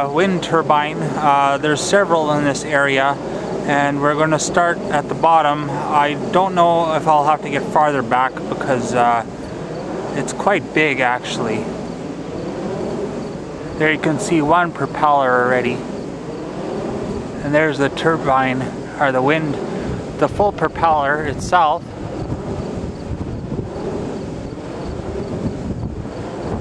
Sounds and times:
Speech: 0.0s - 9.3s, 10.2s - 11.7s, 13.8s - 15.8s, 17.4s - 19.6s, 20.2s - 21.8s.

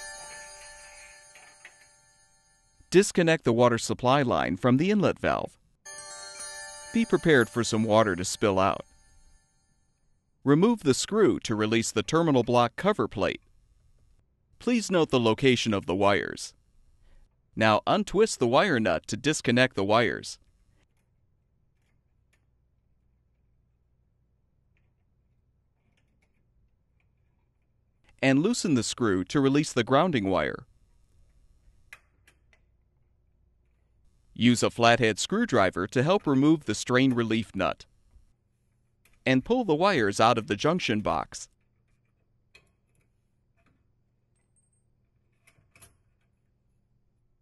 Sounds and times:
Speech: 2.9s - 5.6s, 7.0s - 8.8s, 10.5s - 13.4s, 14.6s - 16.6s, 17.6s - 20.4s, 28.2s - 30.7s, 34.4s - 37.9s, 39.3s - 41.5s
Music: 5.9s - 9.9s.

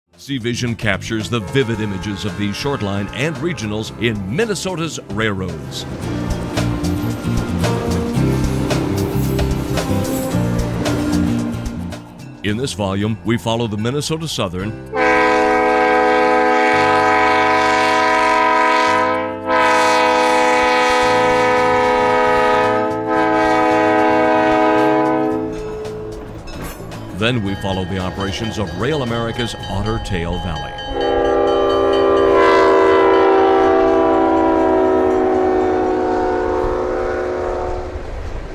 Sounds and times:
Railroad car, train wagon: 0.2s - 38.5s
Train horn: 1.1s - 4.5s, 14.9s - 25.8s, 31.0s - 38.2s.

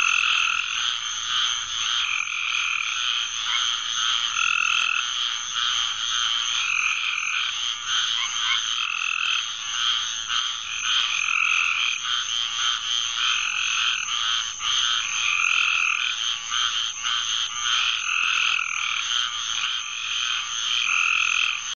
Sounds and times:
Croak: 0.0s - 21.7s.

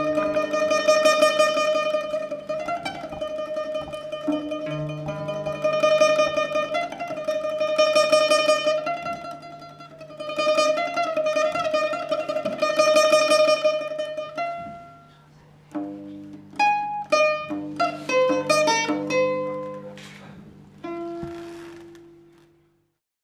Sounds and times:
Guitar: 0.0s - 22.6s.

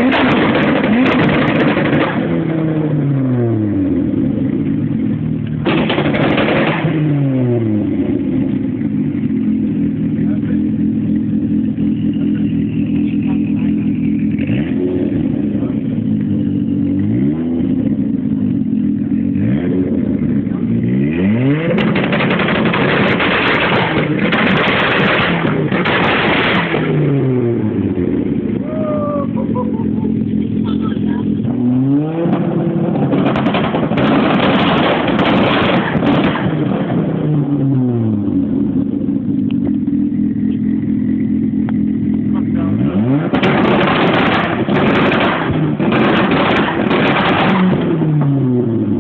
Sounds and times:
Clatter: 0.0s - 2.6s, 4.4s - 27.1s, 29.6s - 31.6s, 32.2s - 37.2s, 38.4s - 49.0s.

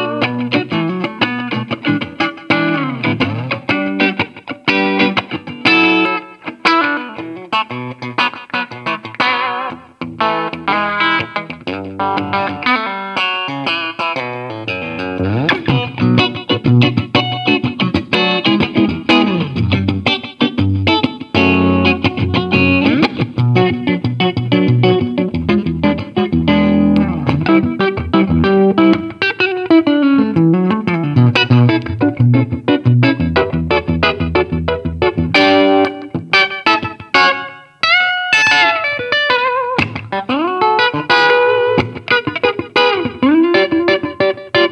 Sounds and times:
Electric guitar: 0.0s - 44.7s.

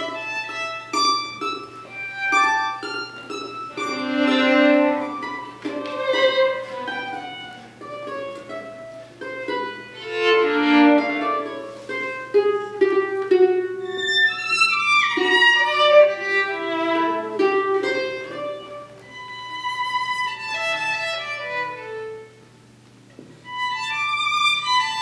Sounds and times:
Pizzicato: 0.0s - 22.4s.

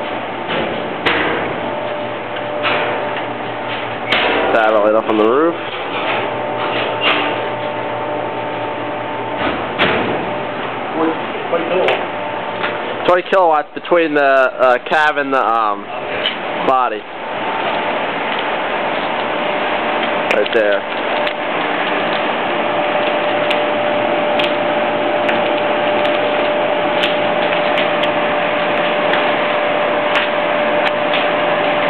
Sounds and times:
Speech: 4.5s - 5.6s, 11.0s - 12.0s, 13.1s - 15.9s, 16.6s - 17.0s, 20.3s - 20.8s.

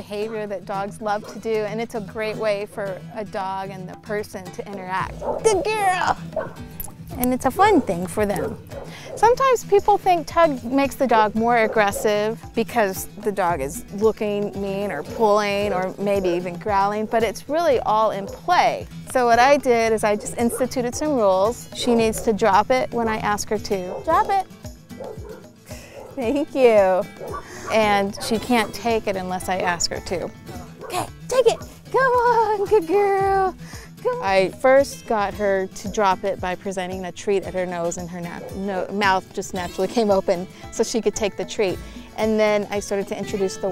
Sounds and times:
Speech: 0.0s - 6.2s, 27.7s - 30.3s, 30.9s - 43.7s
Music: 0.0s - 43.7s
Bow-wow: 5.2s - 5.6s, 6.4s - 6.6s, 27.2s - 27.8s.

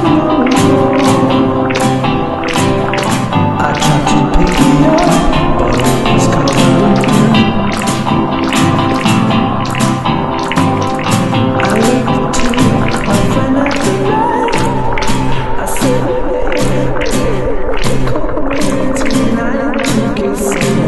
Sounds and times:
Tender music: 0.0s - 20.8s.

